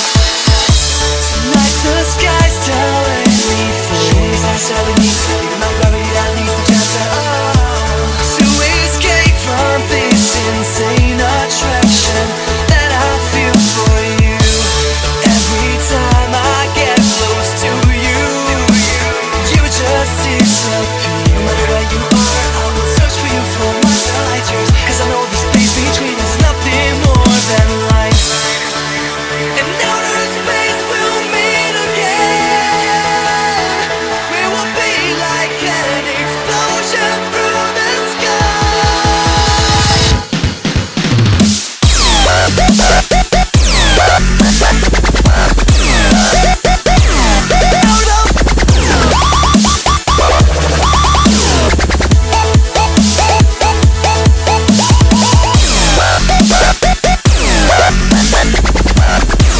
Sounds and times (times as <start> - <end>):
Dubstep: 0.0 - 59.5.